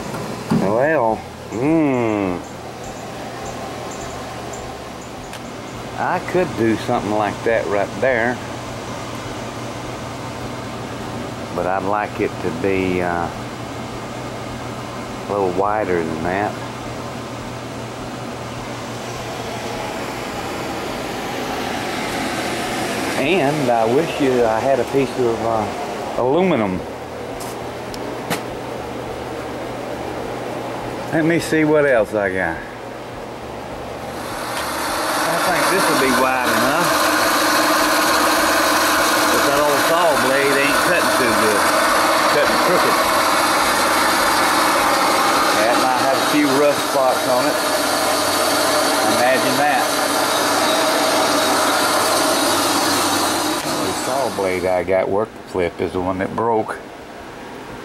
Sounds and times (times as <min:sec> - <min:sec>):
Mechanical fan: 0:00.0 - 0:57.8
Speech: 0:00.5 - 0:02.5, 0:06.0 - 0:08.5, 0:11.5 - 0:13.4, 0:15.3 - 0:16.7, 0:23.2 - 0:26.9, 0:31.1 - 0:32.7, 0:35.3 - 0:36.9, 0:39.3 - 0:41.7, 0:42.3 - 0:43.0, 0:45.5 - 0:47.6, 0:49.0 - 0:50.0, 0:53.8 - 0:56.9.